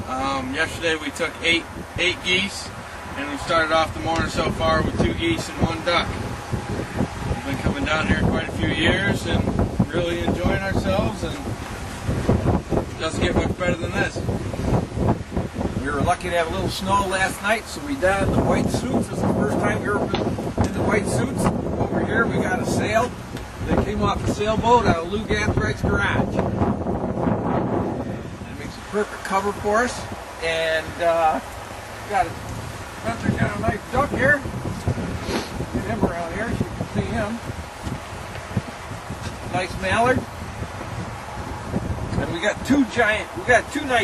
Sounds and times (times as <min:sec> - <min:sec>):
Speech: 0:00.0 - 0:06.2, 0:07.4 - 0:11.5, 0:13.0 - 0:14.2, 0:15.8 - 0:23.1, 0:23.7 - 0:26.4, 0:28.4 - 0:31.5, 0:32.1 - 0:32.4, 0:33.0 - 0:34.4, 0:35.8 - 0:37.4, 0:39.5 - 0:40.3, 0:42.1 - 0:44.0.